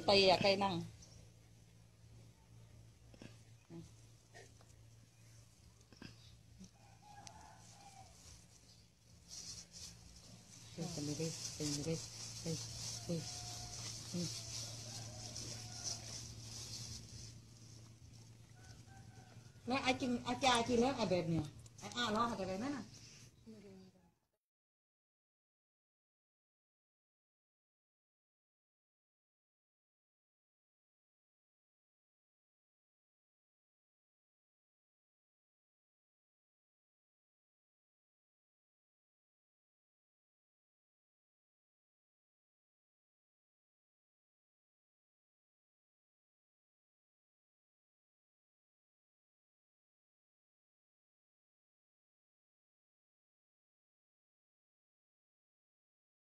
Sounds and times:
Speech: 0.0 - 0.9, 10.8 - 13.3, 19.7 - 22.9
Animal: 2.2 - 23.6.

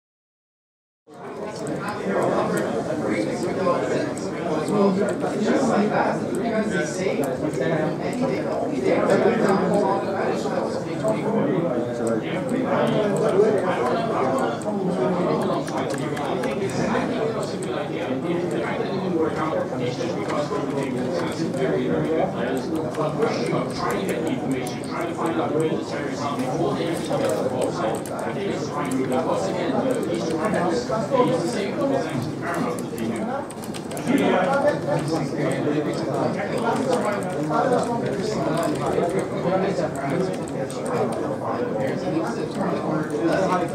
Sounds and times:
Speech: 1.1 - 43.7.

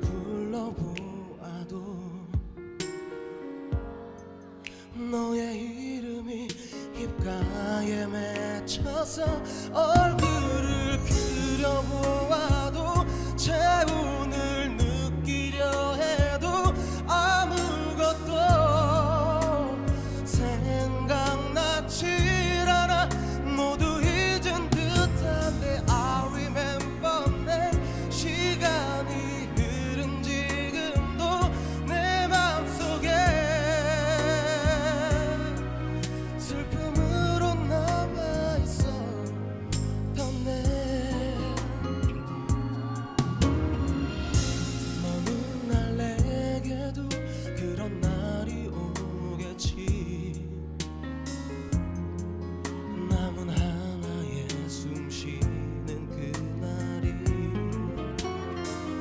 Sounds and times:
Music: 0.0 - 59.0.

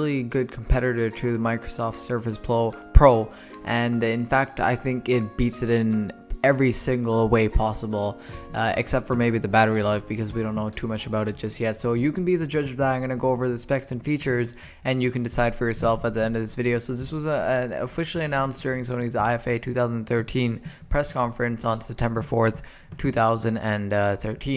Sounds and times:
Speech: 0.0 - 24.5.

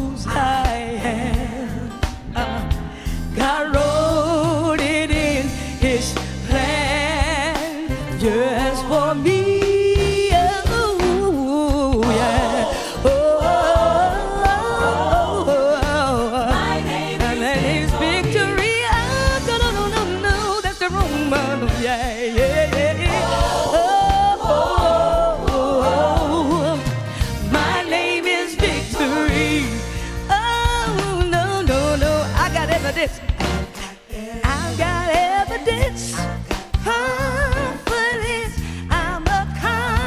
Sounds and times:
Female singing: 0.0 - 1.9, 3.4 - 26.8, 34.2 - 40.0
Music: 0.0 - 40.0.

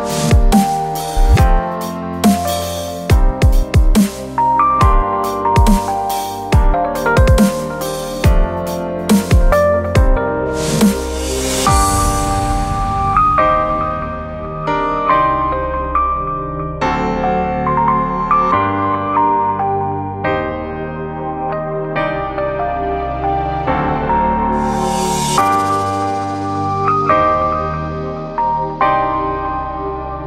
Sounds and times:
Dubstep: 0.0 - 4.5, 7.2 - 12.6.

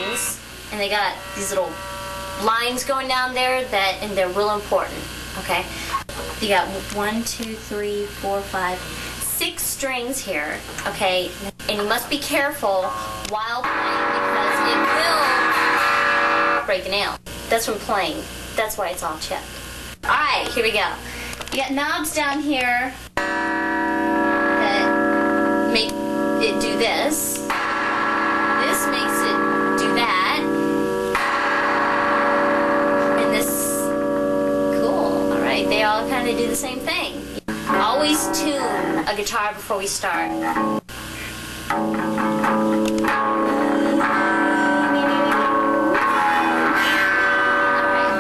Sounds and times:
Speech: 0.0 - 1.8, 2.4 - 15.4, 16.7 - 23.0, 24.6 - 24.9, 25.7 - 27.5, 28.6 - 30.5, 33.2 - 33.9, 34.7 - 40.6, 43.5 - 45.6
Strum: 0.0 - 16.8, 23.2 - 48.2.

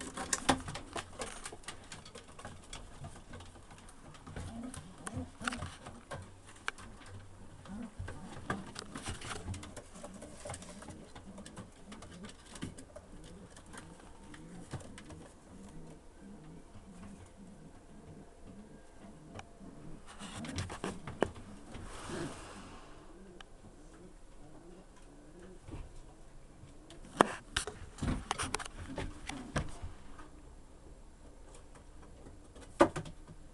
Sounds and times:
Coo: 6.8 - 27.1.

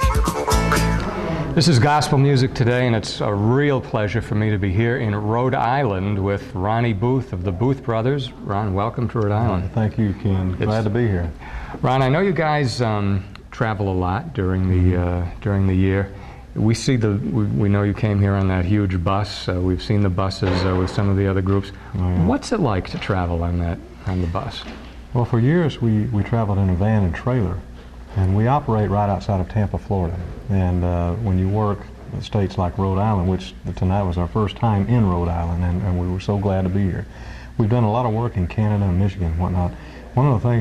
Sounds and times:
Speech: 1.6 - 40.6.

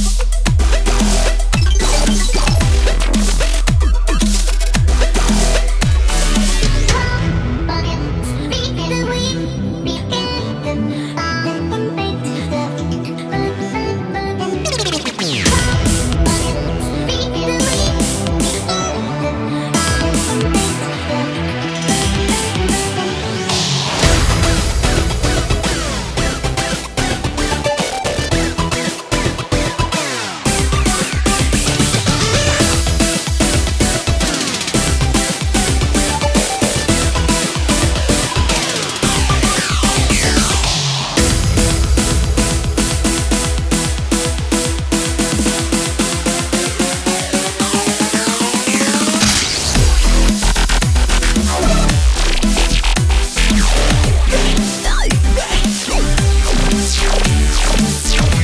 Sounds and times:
Music: 0.0 - 58.4.

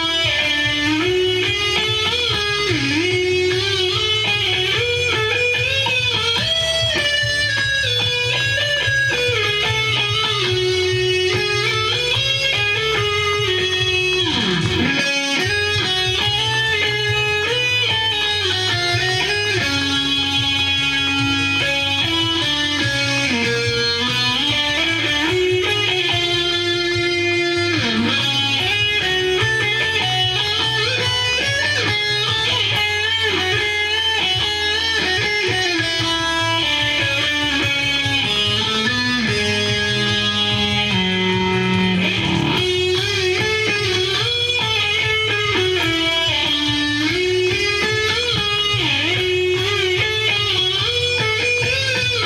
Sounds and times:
Electric guitar: 0.0 - 52.2
Strum: 0.0 - 52.2.

